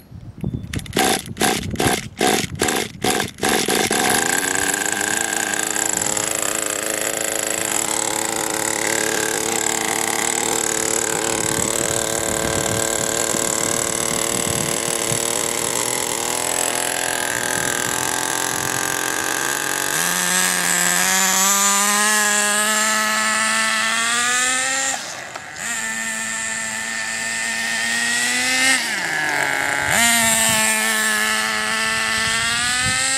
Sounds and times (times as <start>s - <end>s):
Motor vehicle (road): 0.0s - 33.1s.